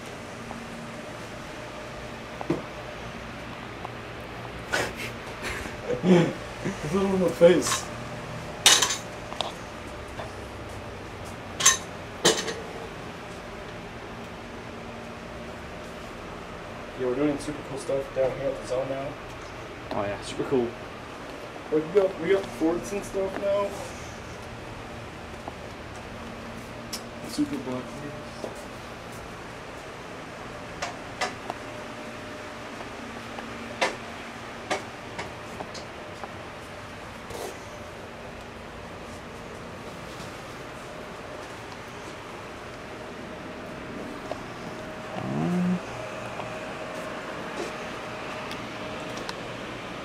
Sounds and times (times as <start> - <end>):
Speech: 6.8 - 7.9, 17.0 - 19.2, 19.9 - 20.8, 21.7 - 23.8, 27.2 - 28.6.